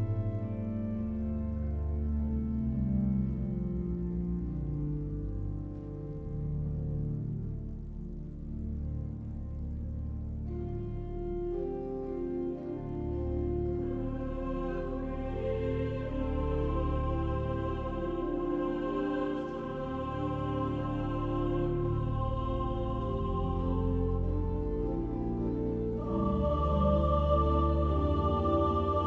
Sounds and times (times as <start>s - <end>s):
Music: 0.0s - 29.0s.